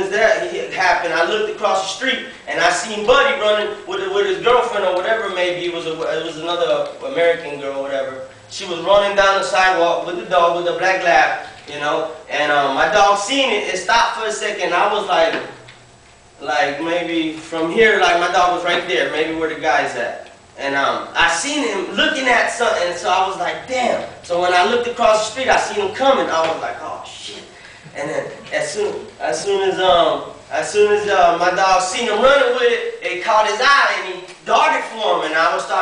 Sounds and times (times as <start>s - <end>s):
Speech: 0.0s - 15.6s, 16.4s - 35.8s.